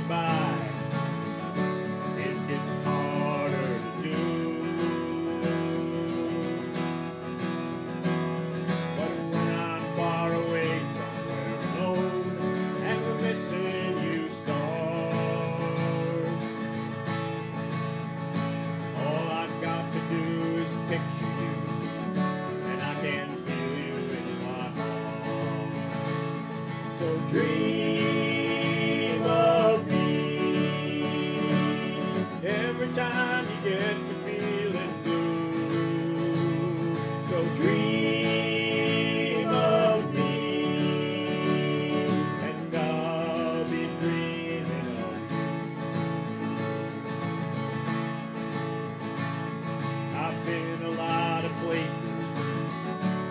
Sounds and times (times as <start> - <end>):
Acoustic guitar: 0.0 - 53.3.